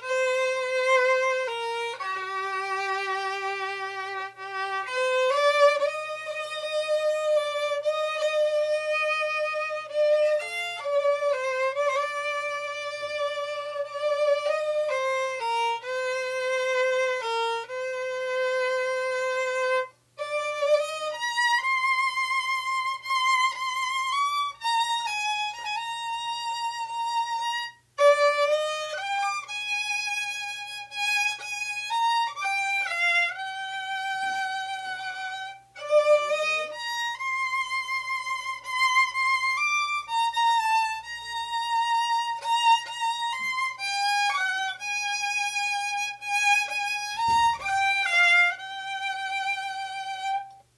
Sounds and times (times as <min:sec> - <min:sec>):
Violin, fiddle: 0:00.0 - 0:50.7.